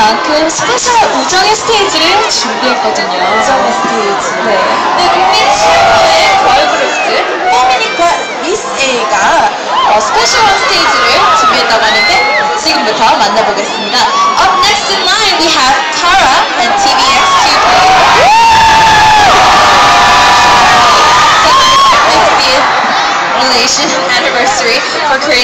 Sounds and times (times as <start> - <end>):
Speech: 0.0 - 17.8, 23.4 - 25.4.